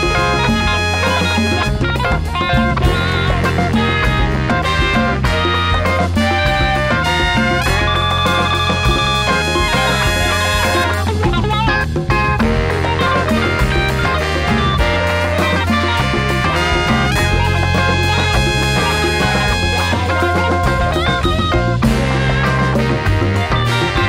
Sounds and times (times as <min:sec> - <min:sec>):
Jazz: 0:00.0 - 0:24.0
Musical instrument: 0:00.0 - 0:24.0.